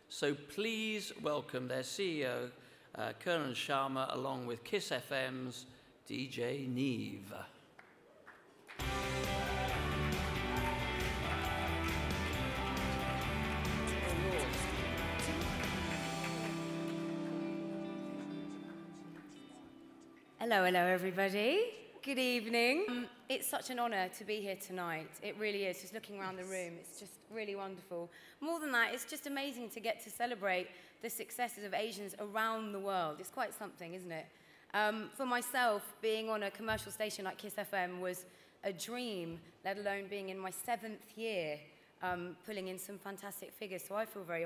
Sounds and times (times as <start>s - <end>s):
Music: 8.7s - 20.4s
Speech: 20.4s - 44.4s.